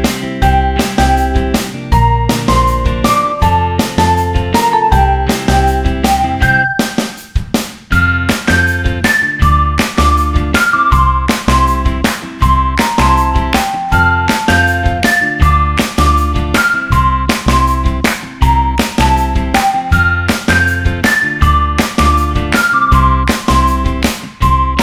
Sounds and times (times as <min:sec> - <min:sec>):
Music: 0:00.0 - 0:24.8.